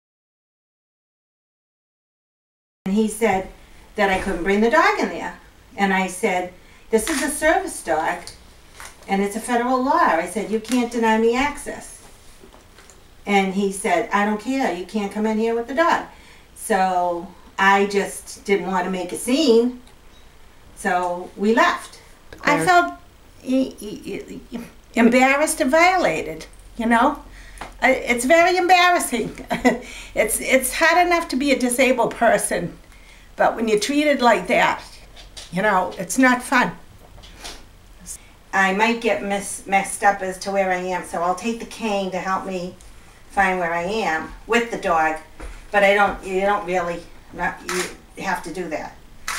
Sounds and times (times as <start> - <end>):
Speech: 2.9 - 8.3, 9.1 - 12.0, 13.3 - 19.8, 20.8 - 32.8, 33.4 - 36.8, 38.0 - 49.0.